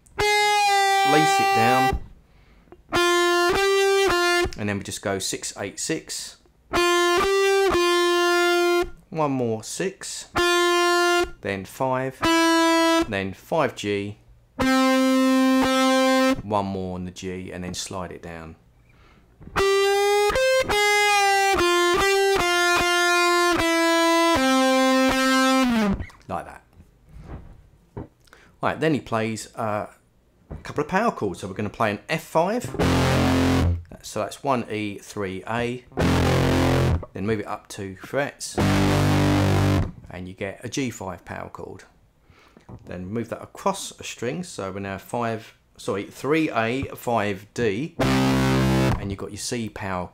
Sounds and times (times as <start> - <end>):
Guitar: 0.0 - 5.2, 6.6 - 9.6, 10.2 - 14.0, 14.6 - 16.6, 18.8 - 28.2, 31.6 - 34.1, 35.6 - 40.1, 47.9 - 49.2
Inside, small room: 0.0 - 50.1
Speech: 1.0 - 2.0, 4.6 - 6.5, 9.1 - 10.4, 11.4 - 12.3, 13.0 - 14.2, 16.4 - 18.6, 26.3 - 26.8, 28.6 - 30.0, 30.6 - 32.8, 33.9 - 35.9, 37.1 - 38.7, 40.1 - 42.0, 42.8 - 48.0, 49.0 - 50.1.